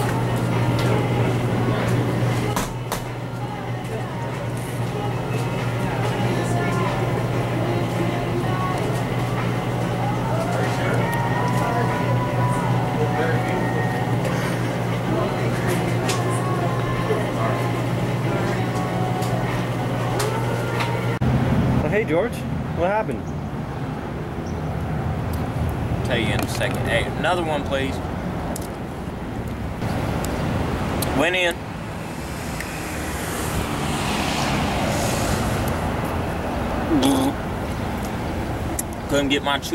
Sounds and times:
Traffic noise, roadway noise: 0:00.0 - 0:39.7.

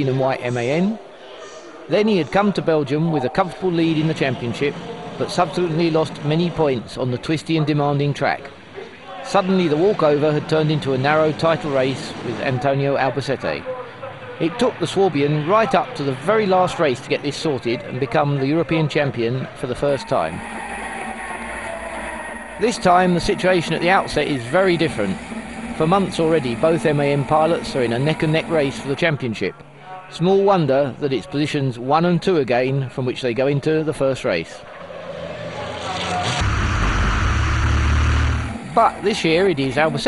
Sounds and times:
Speech: 0:00.0 - 0:20.4, 0:22.6 - 0:25.2, 0:25.8 - 0:34.6, 0:38.8 - 0:40.0
Truck: 0:20.0 - 0:29.0, 0:34.6 - 0:40.0.

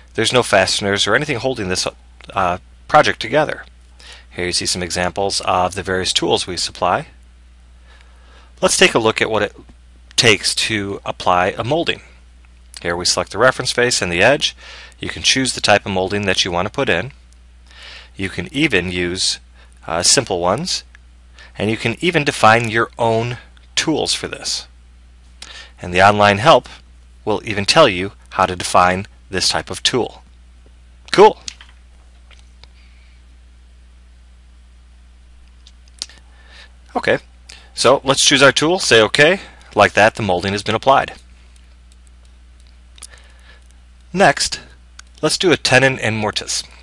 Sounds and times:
Speech: 0:00.2 - 0:03.7, 0:04.3 - 0:07.2, 0:08.6 - 0:12.2, 0:12.8 - 0:17.2, 0:18.2 - 0:20.9, 0:21.6 - 0:24.7, 0:25.8 - 0:30.3, 0:31.1 - 0:31.5, 0:36.9 - 0:41.2, 0:44.1 - 0:46.8.

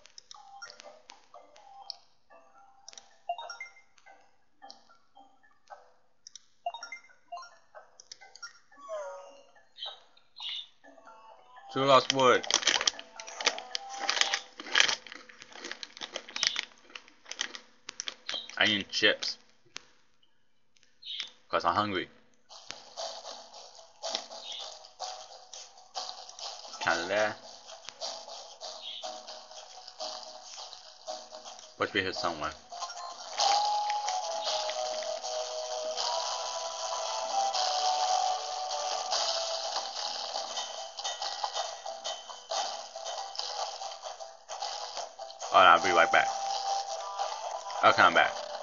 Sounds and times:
Speech: 0:11.7 - 0:12.5, 0:18.6 - 0:19.4, 0:21.5 - 0:22.2, 0:26.8 - 0:27.4, 0:31.8 - 0:32.6, 0:45.5 - 0:46.4, 0:47.8 - 0:48.4.

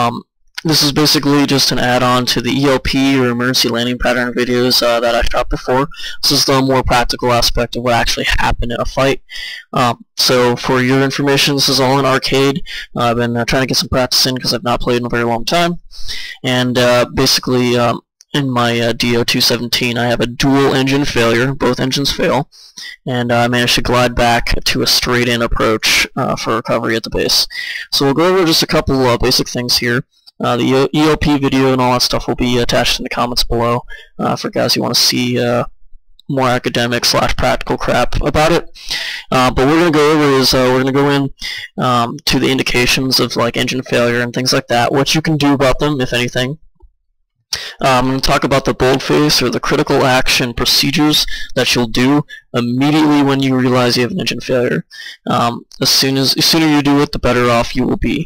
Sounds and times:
Speech: 0:00.0 - 0:35.7, 0:36.3 - 0:46.6, 0:47.6 - 0:58.2.

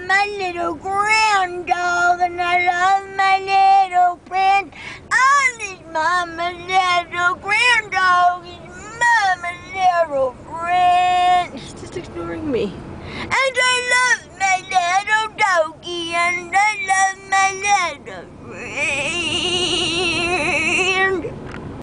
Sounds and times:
Female singing: 0:00.0 - 0:12.3, 0:13.3 - 0:21.3.

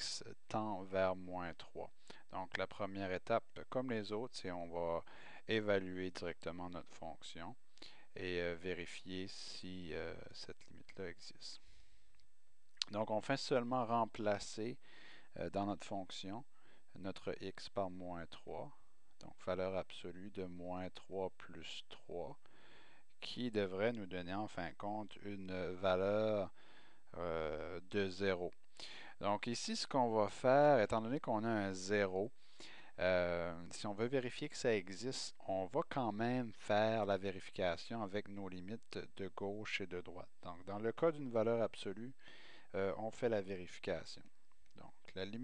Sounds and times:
Speech: 0:00.0 - 0:07.6, 0:08.2 - 0:11.6, 0:12.8 - 0:22.4, 0:23.2 - 0:32.3, 0:33.0 - 0:45.4.

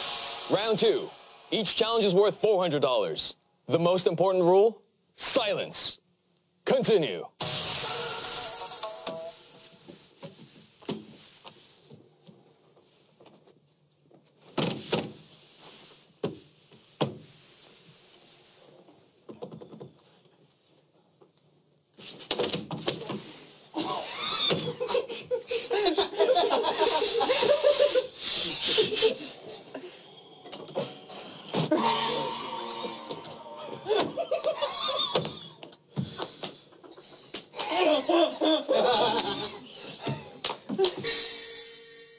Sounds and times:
Belly laugh: 0:23.8 - 0:29.6, 0:33.6 - 0:35.4, 0:36.8 - 0:42.1.

